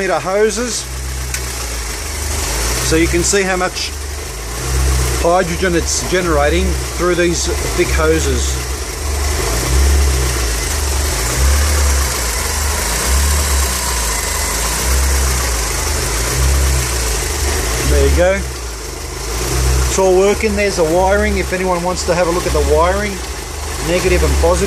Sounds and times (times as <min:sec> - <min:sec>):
Speech: 0:00.0 - 0:00.9, 0:02.8 - 0:04.0, 0:05.2 - 0:08.6, 0:17.8 - 0:18.5, 0:19.9 - 0:24.6
Car: 0:00.0 - 0:24.6
Idling: 0:00.0 - 0:24.6
Outside, urban or manmade: 0:00.0 - 0:24.6.